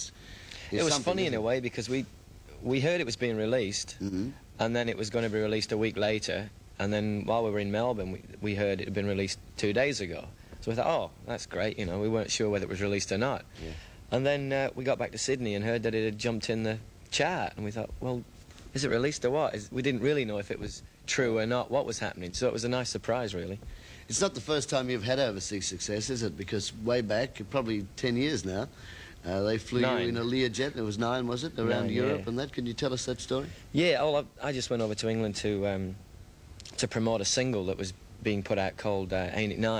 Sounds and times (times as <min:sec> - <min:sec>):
Speech: 0:00.7 - 0:36.0, 0:36.7 - 0:39.7.